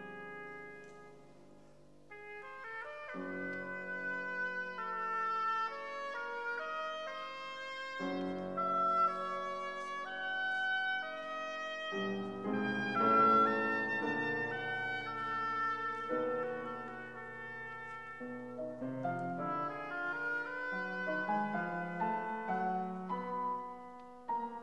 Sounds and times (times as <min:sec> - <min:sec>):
Music: 0:00.0 - 0:24.6.